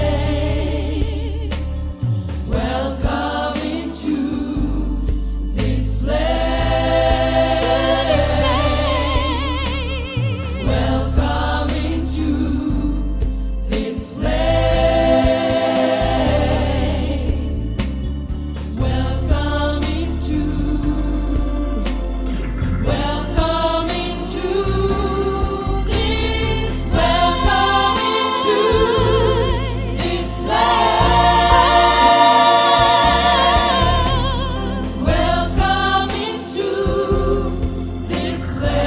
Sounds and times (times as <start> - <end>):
Choir: 0.0 - 18.1, 18.7 - 38.8
Christmas music: 0.0 - 38.8
Gospel music: 0.0 - 38.8.